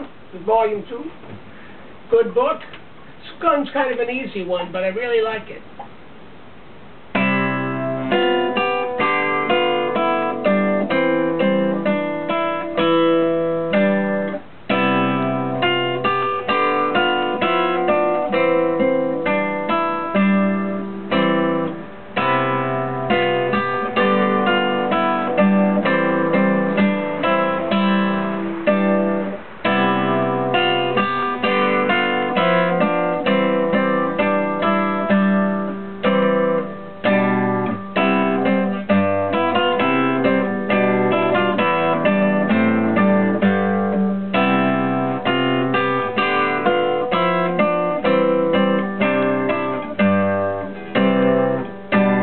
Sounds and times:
Acoustic guitar: 0.0 - 52.2
Strum: 0.0 - 52.2.

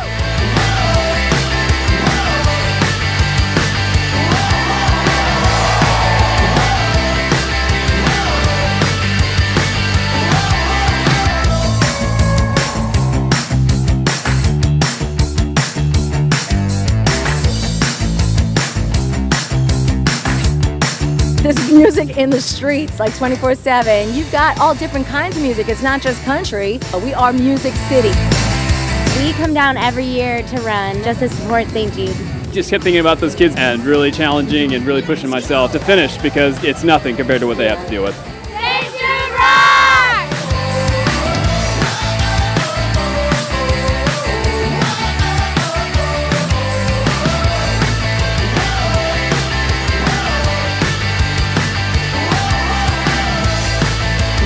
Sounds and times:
Rock and roll: 0.0 - 54.4.

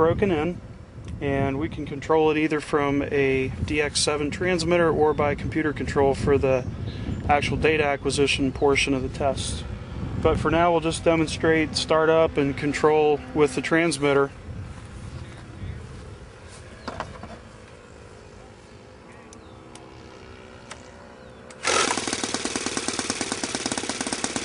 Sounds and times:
Speech: 1.2 - 6.6, 7.3 - 9.6, 10.2 - 14.4.

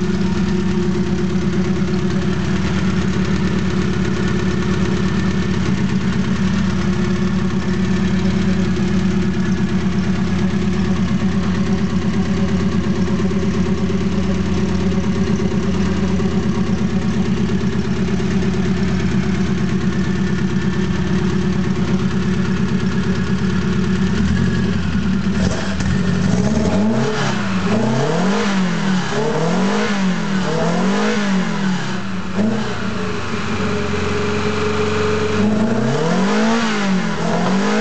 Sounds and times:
Heavy engine (low frequency): 0.0 - 37.8
Vehicle: 0.0 - 37.8
Accelerating, revving, vroom: 25.4 - 32.8, 35.1 - 37.8.

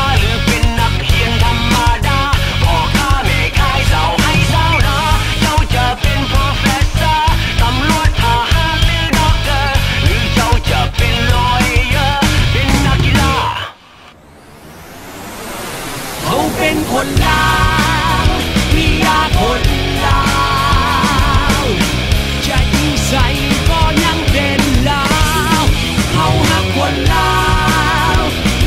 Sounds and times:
Music: 0.0 - 13.7, 16.2 - 28.6.

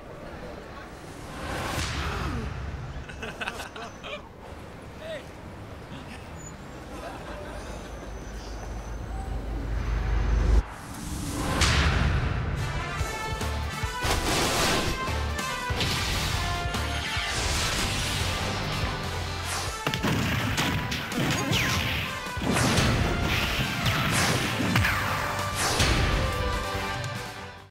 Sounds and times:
Music: 11.1 - 27.7.

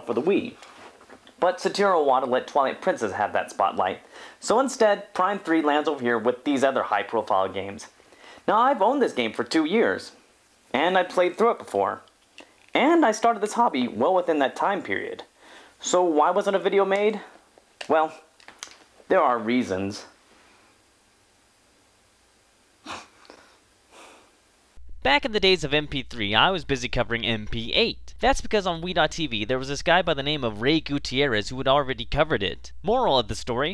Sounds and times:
Speech: 0.0 - 0.6, 1.4 - 12.1, 12.7 - 18.3, 19.1 - 20.2, 25.0 - 33.7
Inside, small room: 0.0 - 33.7.

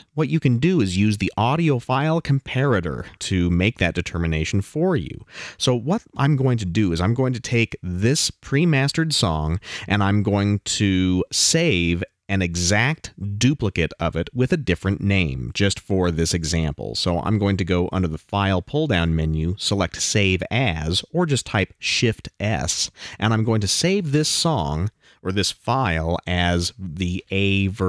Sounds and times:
Speech: 0.0 - 27.8.

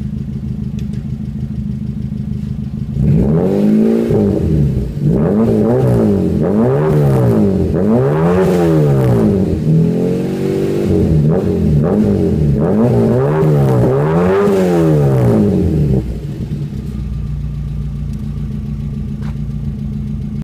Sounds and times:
Car: 0.0 - 20.4.

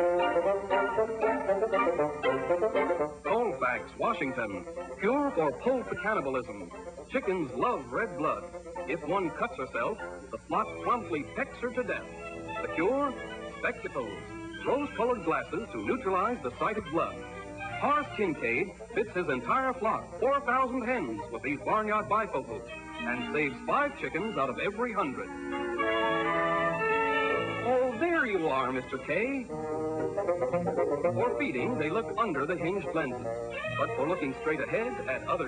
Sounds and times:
Music: 0.0 - 35.4
Speech: 3.3 - 17.2, 17.8 - 25.3, 27.6 - 29.5, 31.2 - 33.2, 33.8 - 35.4.

